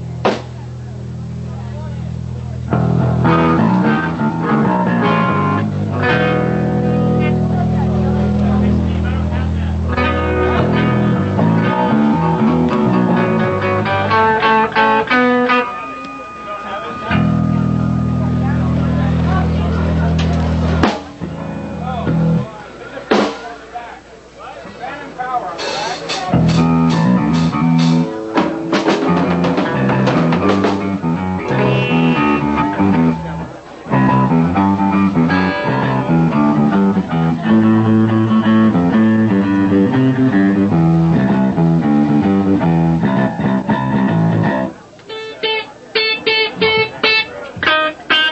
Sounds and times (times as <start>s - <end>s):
Speech: 0.0s - 3.0s, 3.6s - 12.5s, 15.9s - 28.7s, 44.4s - 48.3s
Music: 0.0s - 23.6s, 25.6s - 48.3s.